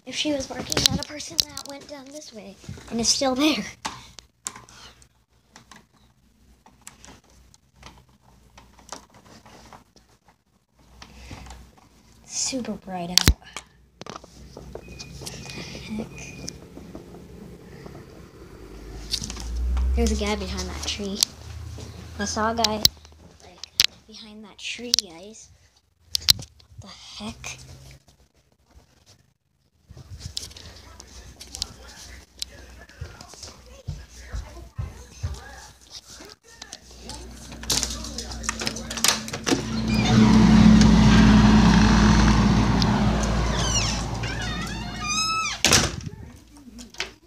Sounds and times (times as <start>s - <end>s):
Outside, urban or manmade: 13.1s - 24.1s, 36.3s - 47.2s.